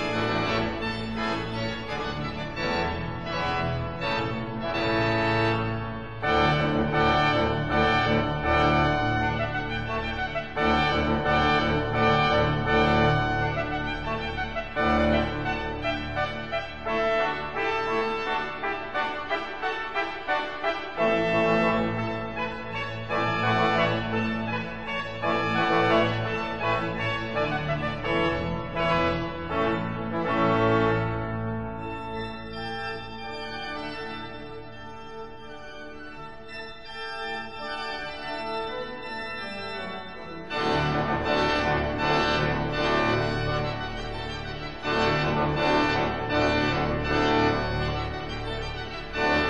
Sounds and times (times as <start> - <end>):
Hammond organ: 0.0 - 49.4.